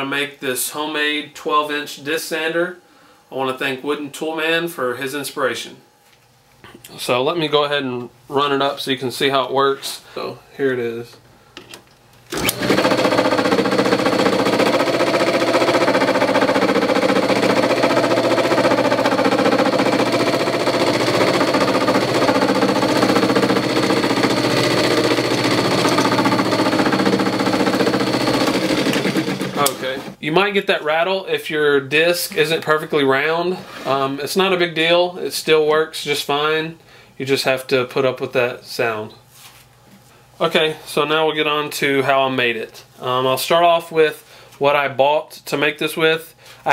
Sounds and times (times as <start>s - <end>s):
Inside, small room: 0.0s - 46.7s.